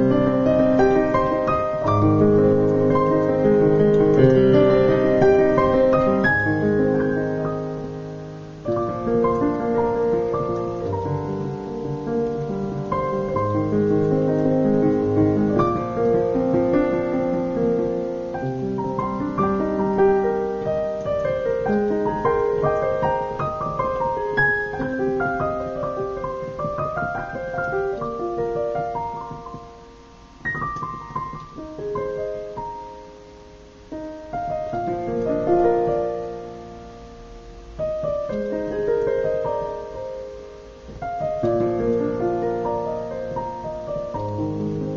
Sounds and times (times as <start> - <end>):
Electric piano: 0.0 - 44.9.